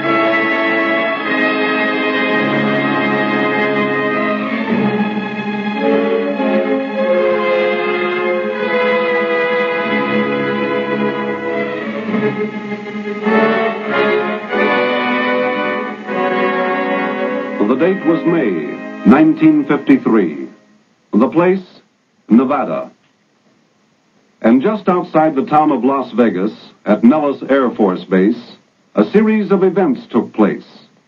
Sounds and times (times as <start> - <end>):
Music: 0.0 - 21.5, 24.5 - 30.6.